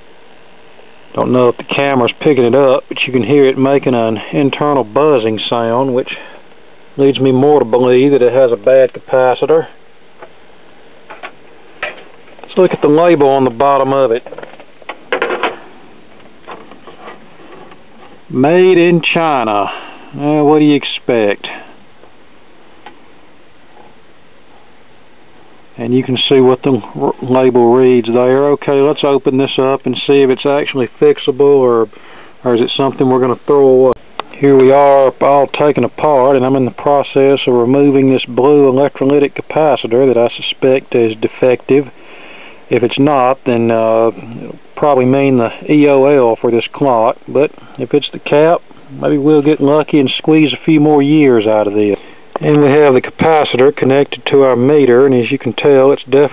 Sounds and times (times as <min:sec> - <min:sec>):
Speech: 0:01.1 - 0:06.4, 0:07.0 - 0:09.8, 0:12.5 - 0:14.3, 0:18.3 - 0:21.7, 0:25.8 - 0:41.9, 0:42.7 - 0:56.3.